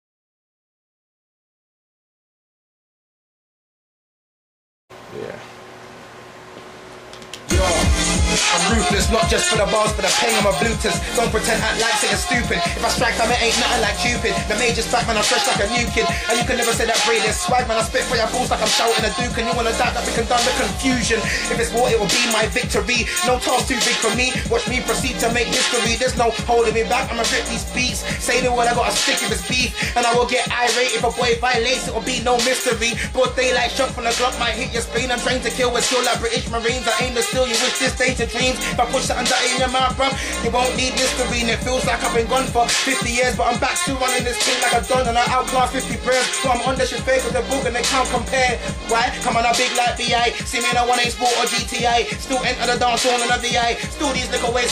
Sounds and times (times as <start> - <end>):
Hip hop music: 7.4 - 54.7.